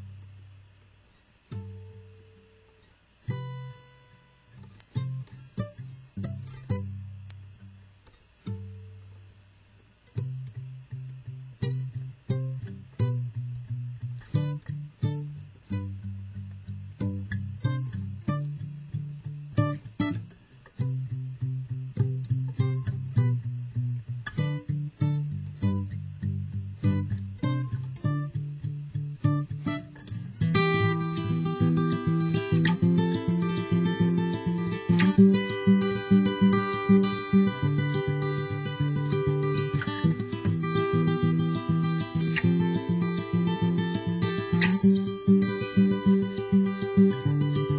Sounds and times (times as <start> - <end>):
Strum: 0.0 - 47.7.